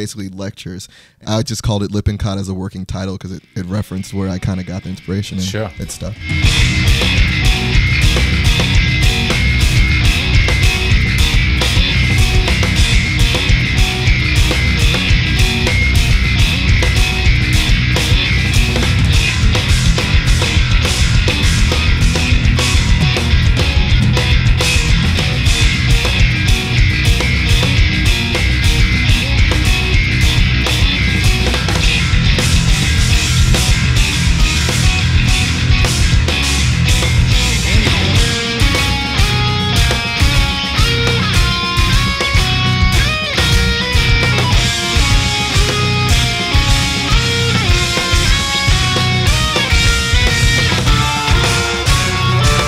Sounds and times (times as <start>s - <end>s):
Strum: 5.7s - 52.6s.